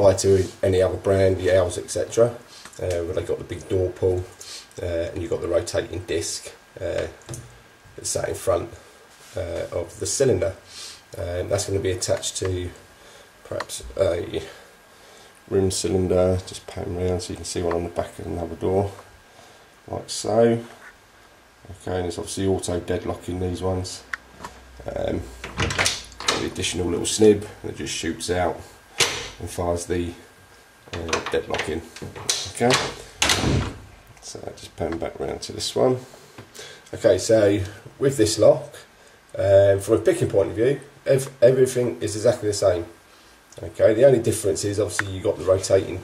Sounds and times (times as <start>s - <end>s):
Speech: 0.0s - 7.2s, 8.0s - 12.8s, 13.4s - 14.6s, 15.5s - 19.1s, 19.9s - 20.8s, 21.6s - 24.2s, 24.8s - 25.4s, 26.3s - 28.7s, 29.4s - 30.3s, 30.9s - 33.6s, 34.2s - 36.1s, 36.9s - 43.0s, 43.6s - 46.0s.